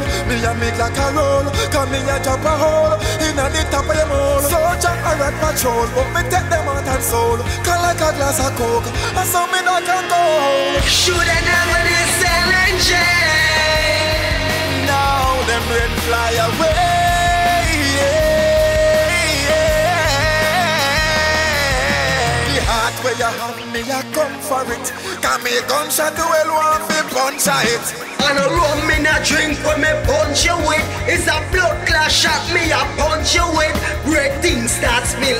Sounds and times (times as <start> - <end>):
Exciting music: 0.0 - 35.3
Pop music: 0.0 - 35.3.